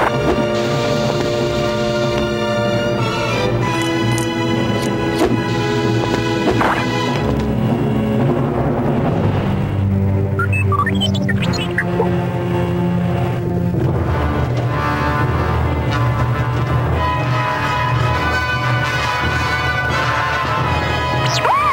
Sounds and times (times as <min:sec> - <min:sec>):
Music: 0:00.0 - 0:21.7.